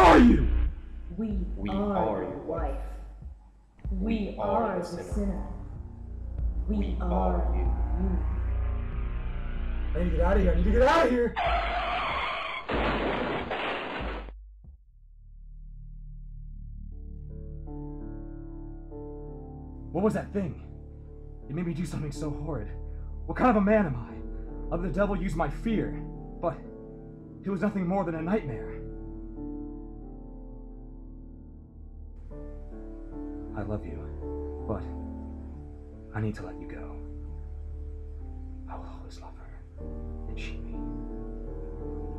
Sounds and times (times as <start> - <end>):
Speech: 0.0 - 0.5, 1.1 - 2.9, 3.9 - 5.6, 6.7 - 8.2, 10.0 - 11.4, 20.0 - 20.6, 21.5 - 22.7, 23.3 - 26.6, 27.5 - 28.8, 36.1 - 37.0, 40.3 - 40.7
Music: 0.0 - 12.0, 14.2 - 42.1.